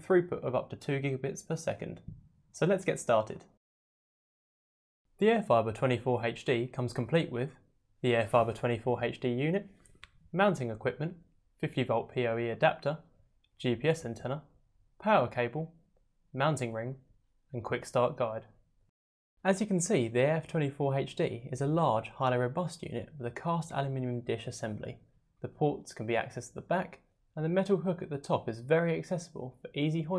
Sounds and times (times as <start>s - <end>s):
Speech: 0.0s - 3.6s, 5.2s - 9.7s, 10.3s - 18.6s, 19.4s - 30.1s.